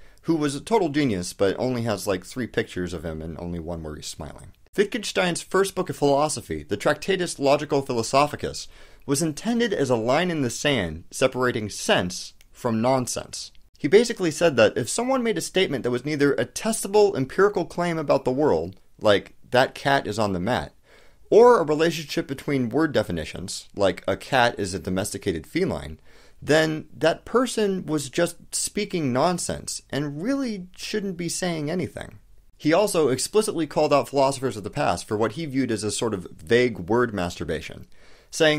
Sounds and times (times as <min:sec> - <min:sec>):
Speech: 0:00.0 - 0:38.5.